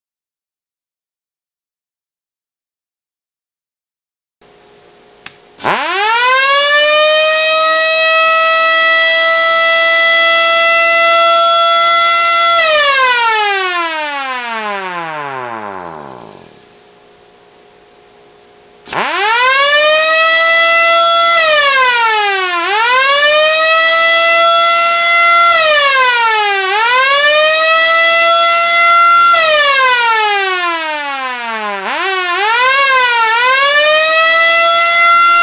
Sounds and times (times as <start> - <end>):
Civil defense siren: 5.6 - 16.6, 18.9 - 35.4.